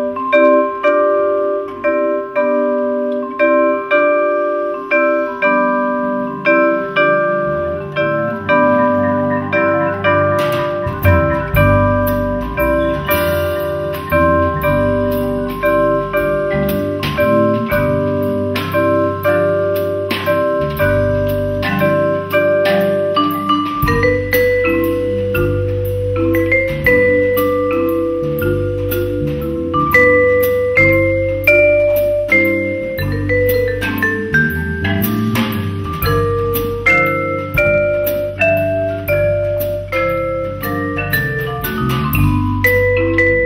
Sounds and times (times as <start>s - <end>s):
Vibraphone: 0.0s - 43.4s.